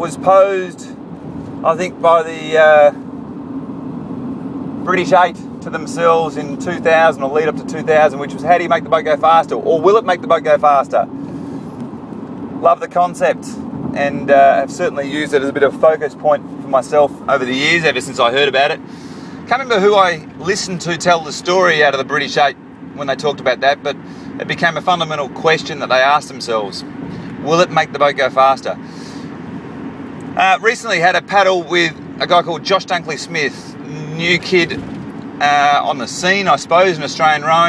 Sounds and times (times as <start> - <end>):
Speech: 0.0 - 1.0, 1.6 - 3.0, 4.9 - 11.1, 12.6 - 18.8, 19.5 - 28.8, 30.4 - 34.8, 35.4 - 37.6.